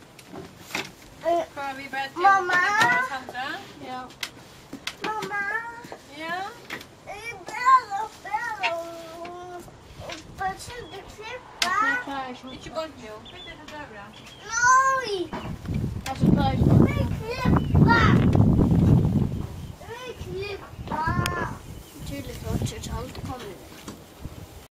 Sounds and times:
Wind noise (microphone): 15.3s - 23.5s, 24.1s - 24.7s
Speech: 19.9s - 23.6s.

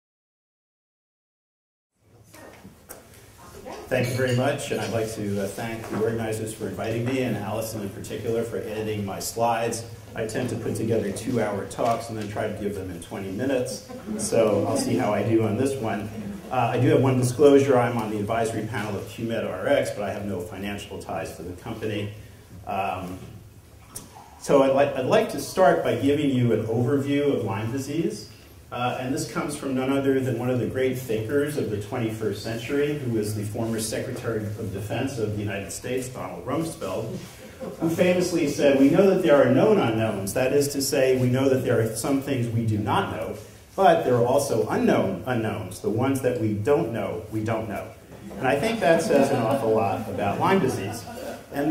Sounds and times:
Speech: 3.5s - 23.4s, 24.0s - 51.7s.

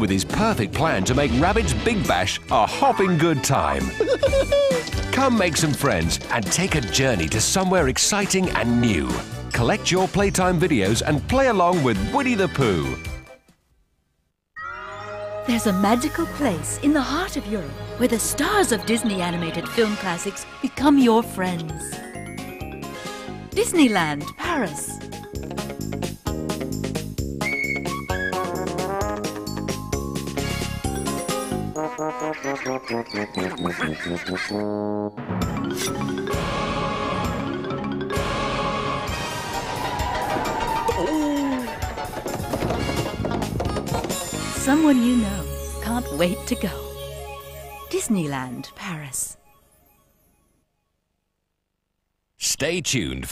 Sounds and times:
Music: 0.0s - 13.6s, 14.6s - 51.0s.

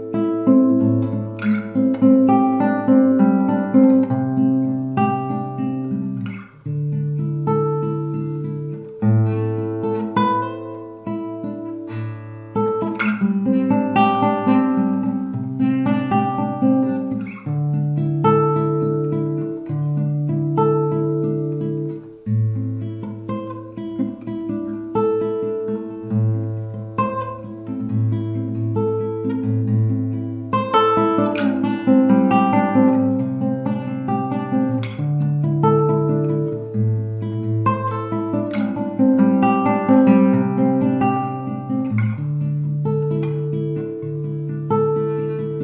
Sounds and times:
Guitar: 0.0s - 45.6s.

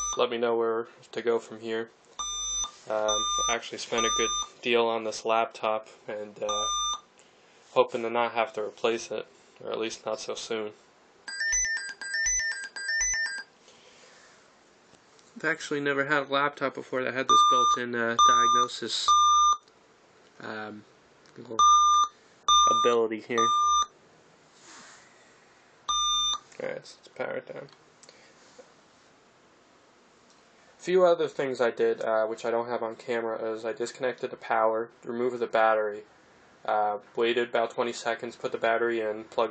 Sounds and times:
Inside, small room: 0.0s - 39.5s
Speech: 0.2s - 1.9s, 2.9s - 6.7s, 7.7s - 10.8s, 15.4s - 19.2s, 20.4s - 21.7s, 22.7s - 23.6s, 26.6s - 27.8s, 30.8s - 39.5s.

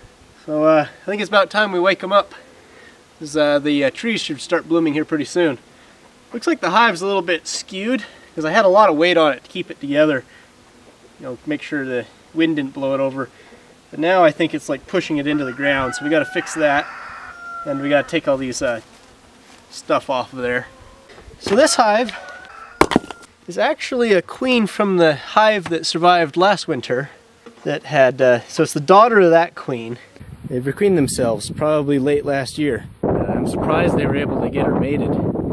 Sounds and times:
Speech: 0.4s - 2.4s, 3.2s - 5.6s, 6.3s - 10.2s, 11.2s - 13.3s, 13.9s - 16.9s, 17.7s - 18.8s, 19.7s - 20.7s, 21.4s - 22.3s, 23.5s - 35.2s.

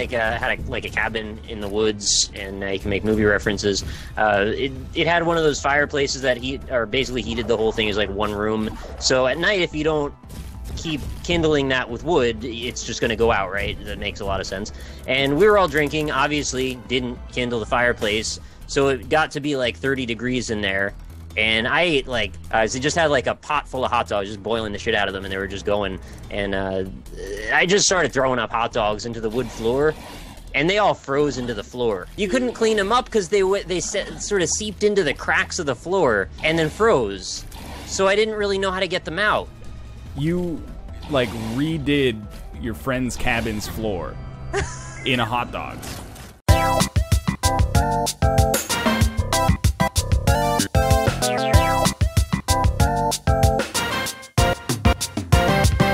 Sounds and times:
Speech: 0.0s - 10.2s, 10.8s - 30.0s, 30.6s - 39.5s, 40.2s - 44.2s, 45.0s - 45.8s
Music: 0.0s - 55.9s.

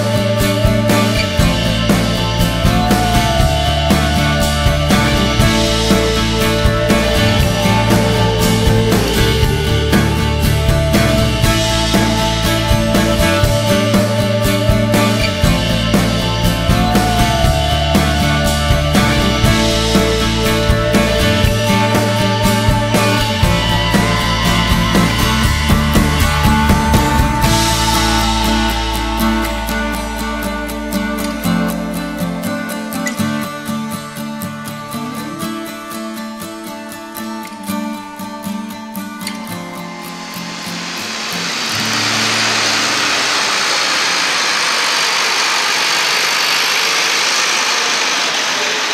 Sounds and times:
Medium engine (mid frequency): 0.0s - 33.8s, 40.2s - 48.9s
Music: 0.0s - 48.9s
Vehicle: 40.2s - 48.9s.

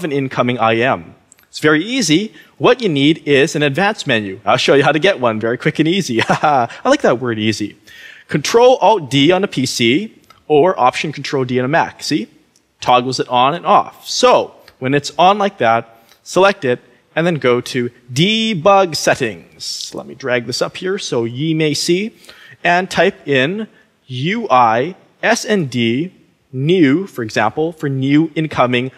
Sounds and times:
Speech: 0.0s - 28.9s.

